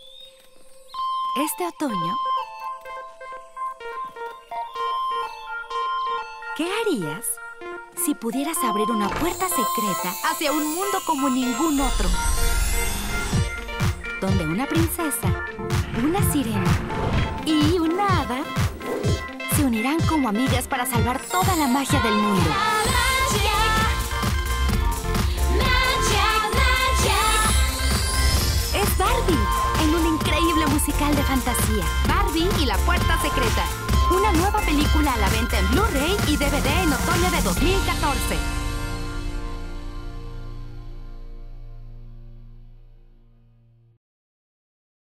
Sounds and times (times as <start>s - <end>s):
Music: 0.0s - 44.0s
Speech: 1.4s - 2.2s, 6.6s - 7.4s, 8.0s - 12.2s, 14.2s - 15.4s, 16.0s - 16.7s, 17.4s - 18.5s, 19.5s - 22.6s, 28.8s - 38.5s.